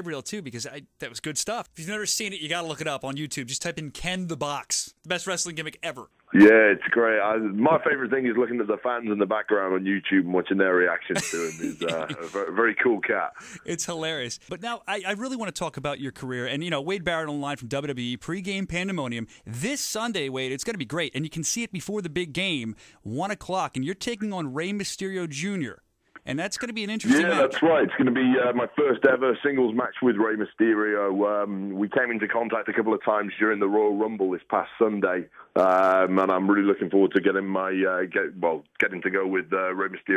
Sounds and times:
Speech: 0:00.0 - 0:40.1.

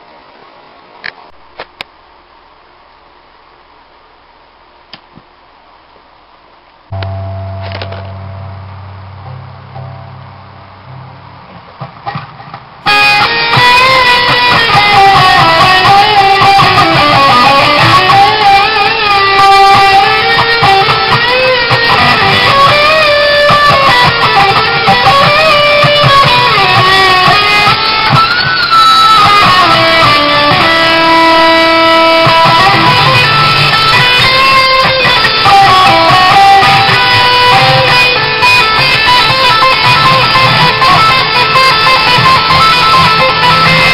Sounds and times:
Electric guitar: 0:06.9 - 0:43.9.

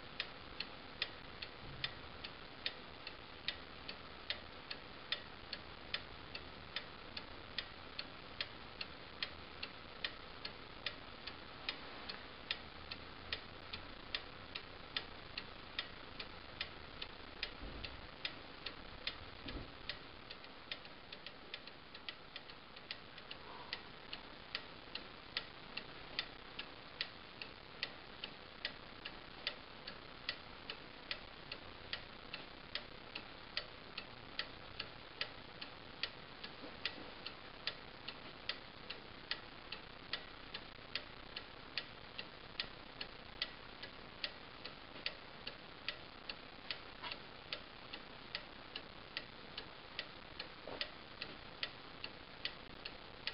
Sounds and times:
Tick-tock: 0:00.2 - 0:53.3.

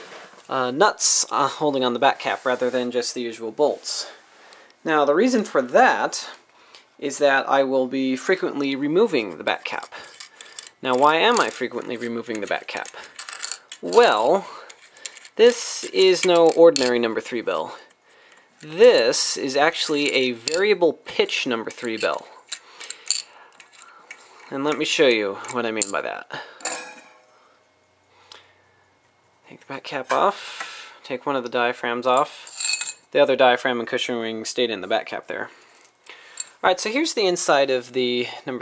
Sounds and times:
Speech: 0:00.5 - 0:04.2, 0:04.8 - 0:06.4, 0:07.0 - 0:10.1, 0:10.8 - 0:13.0, 0:13.8 - 0:14.7, 0:15.4 - 0:17.9, 0:18.6 - 0:22.4, 0:24.5 - 0:26.4, 0:29.5 - 0:32.5, 0:33.2 - 0:35.5, 0:36.6 - 0:38.6.

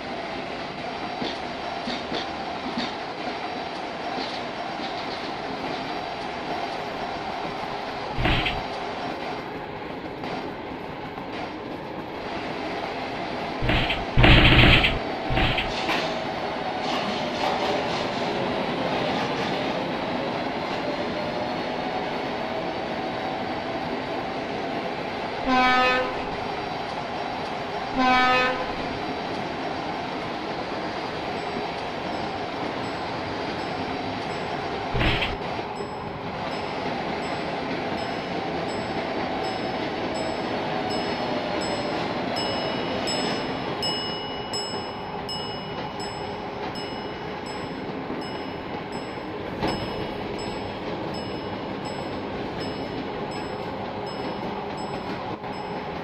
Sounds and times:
Train: 0:00.0 - 0:56.0.

